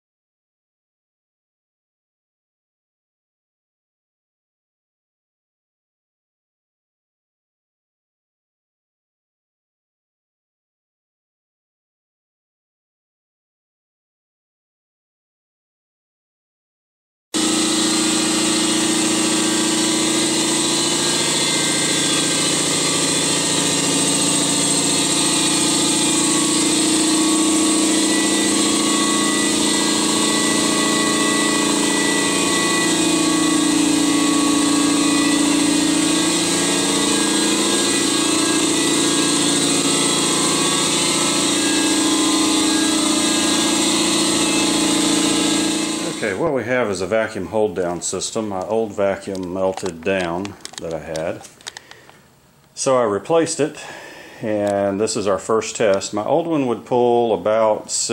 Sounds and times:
Propeller, airscrew: 17.4s - 46.2s.

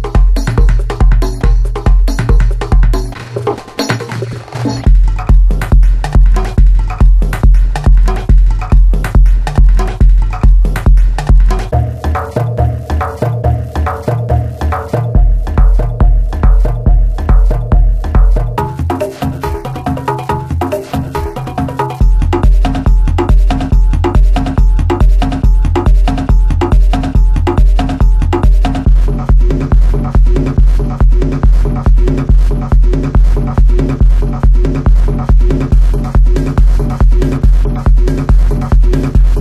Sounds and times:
Bass drum: 0.0s - 39.4s
Techno: 0.0s - 39.4s.

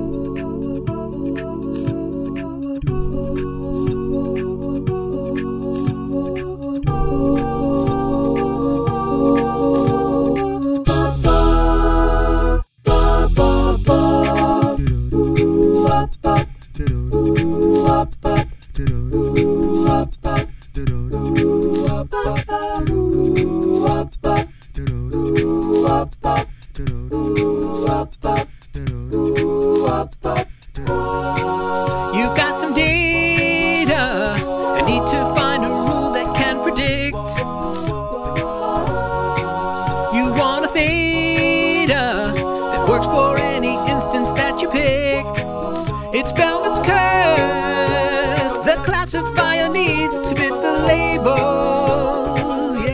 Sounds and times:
A capella: 0.0s - 52.9s.

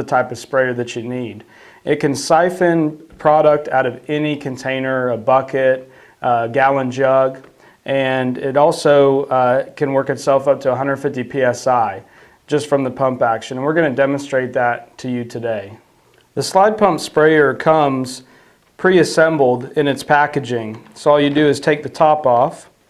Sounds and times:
Speech: 0.0s - 15.8s, 16.4s - 22.8s.

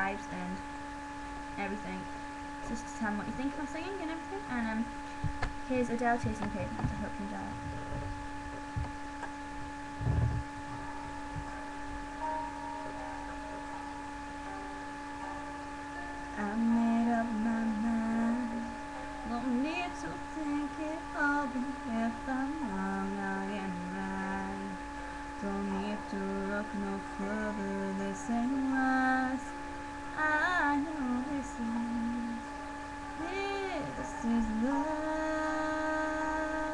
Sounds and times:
Music: 9.4s - 21.9s
Female singing: 16.4s - 24.8s, 25.4s - 29.5s, 30.2s - 32.4s, 33.2s - 36.7s.

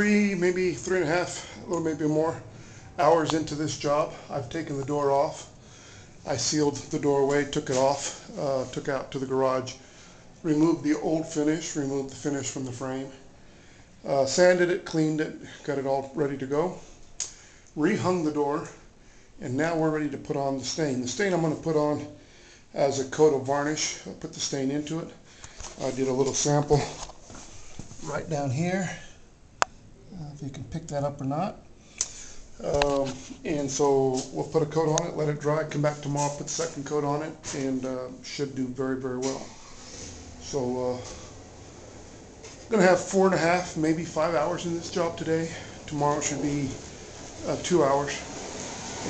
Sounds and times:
Speech: 0.0s - 5.6s, 6.2s - 9.8s, 10.4s - 13.2s, 14.0s - 16.9s, 17.8s - 18.8s, 19.4s - 25.2s, 25.8s - 27.1s, 28.0s - 29.2s, 30.1s - 31.7s, 32.6s - 39.6s, 40.4s - 41.3s, 42.7s - 48.3s.

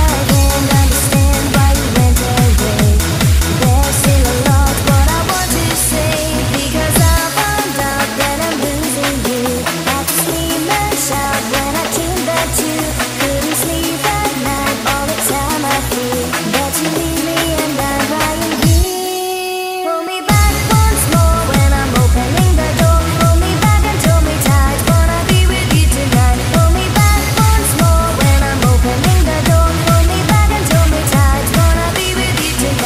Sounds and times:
Trance music: 0.0s - 19.4s, 20.2s - 32.8s.

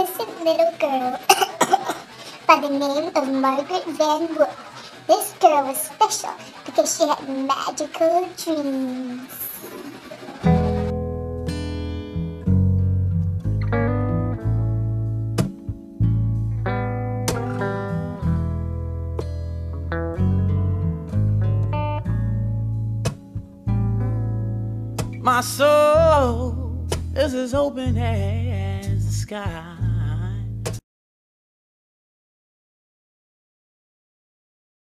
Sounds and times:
Speech: 0.0s - 1.4s, 2.4s - 9.6s, 25.2s - 30.5s
Bass guitar: 10.4s - 30.8s.

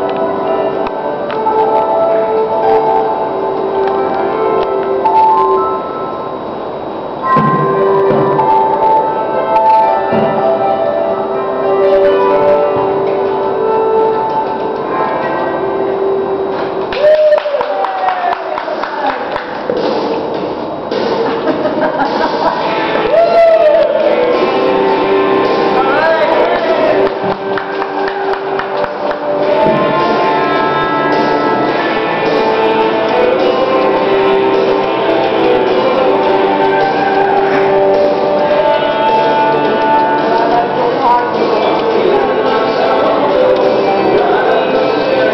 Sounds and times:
Music: 0.0s - 45.3s.

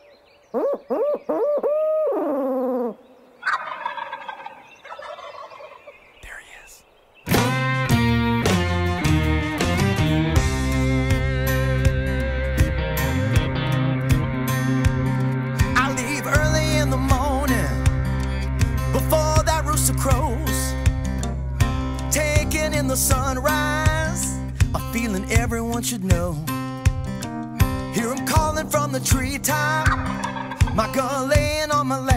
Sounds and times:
Music: 7.3s - 32.1s.

